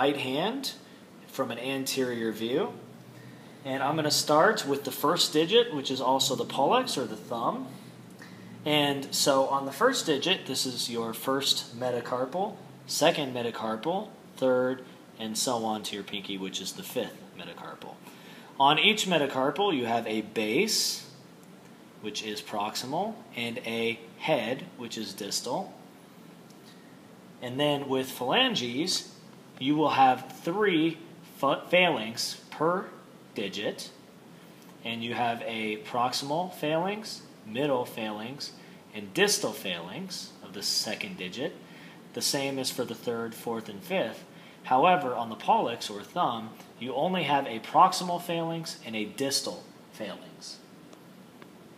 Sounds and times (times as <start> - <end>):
Speech: 0.0 - 2.9, 3.6 - 7.9, 8.6 - 18.0, 18.6 - 21.2, 22.0 - 25.8, 27.4 - 34.0, 34.8 - 50.7
Inside, small room: 0.0 - 51.7.